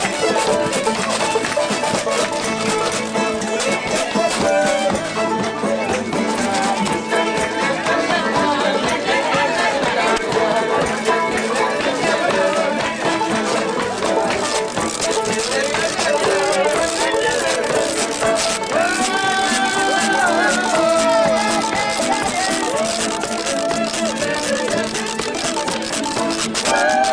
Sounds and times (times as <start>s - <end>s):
Music: 0.0s - 27.1s.